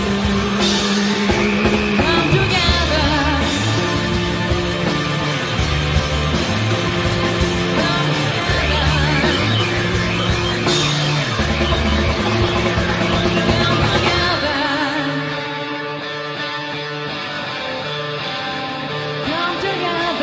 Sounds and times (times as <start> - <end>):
Punk rock: 0.0 - 20.2
Singing: 0.7 - 3.7, 7.6 - 9.9, 13.2 - 15.5.